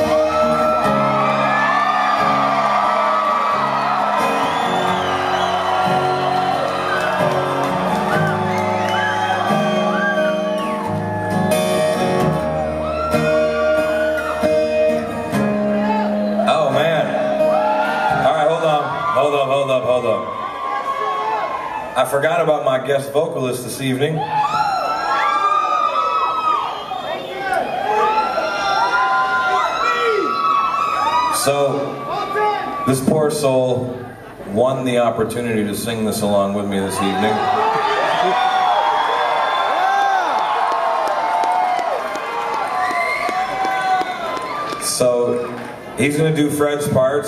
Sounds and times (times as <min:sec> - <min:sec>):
Speech: 0:18.2 - 0:20.3, 0:22.0 - 0:24.2, 0:31.4 - 0:37.5, 0:44.8 - 0:45.4, 0:46.0 - 0:47.2.